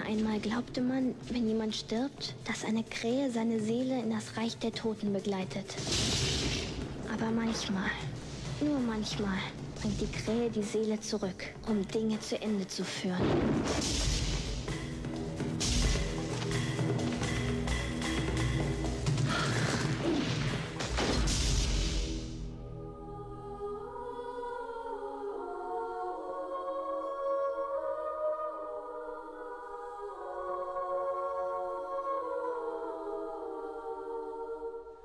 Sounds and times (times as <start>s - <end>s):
Speech: 0.0s - 5.8s, 7.1s - 13.3s
Music: 0.0s - 35.0s.